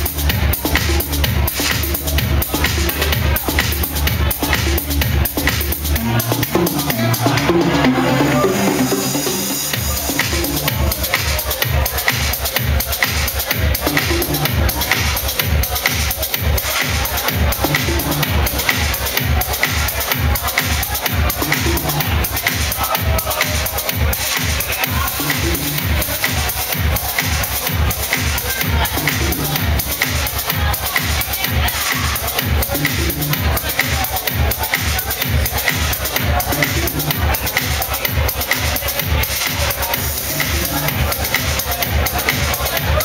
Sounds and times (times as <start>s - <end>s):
Techno: 0.0s - 43.0s.